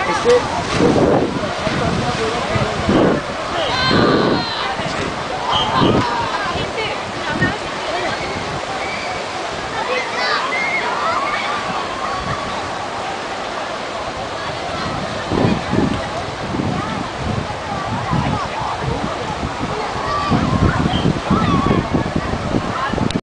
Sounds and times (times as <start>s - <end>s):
Speech: 0.0s - 0.6s, 1.3s - 13.7s
Stream: 0.0s - 23.2s
Waterfall: 0.0s - 23.2s.